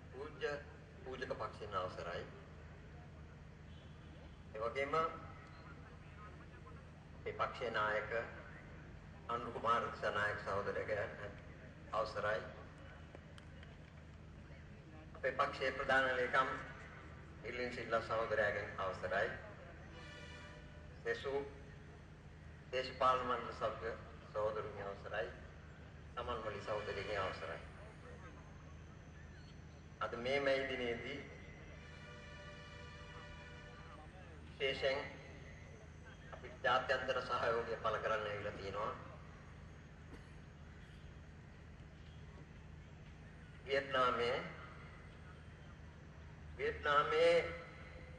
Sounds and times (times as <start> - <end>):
Male speech, man speaking: 0.0 - 2.5, 4.5 - 8.7, 9.3 - 12.9, 15.0 - 19.7, 21.0 - 21.6, 22.7 - 25.4, 26.2 - 28.4, 30.0 - 31.4, 33.9 - 35.3, 36.2 - 39.2, 43.6 - 44.7, 46.6 - 47.7
Narration, monologue: 0.0 - 48.1.